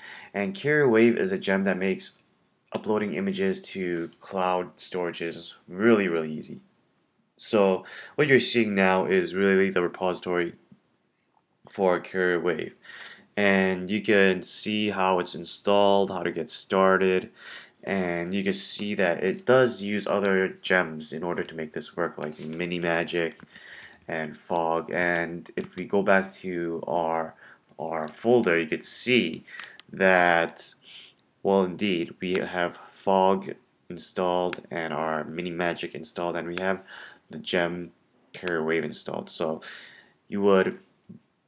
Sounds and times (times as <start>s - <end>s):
Speech: 0.3s - 6.7s, 7.4s - 10.6s, 11.7s - 12.8s, 13.4s - 23.4s, 24.1s - 39.7s, 40.3s - 40.9s.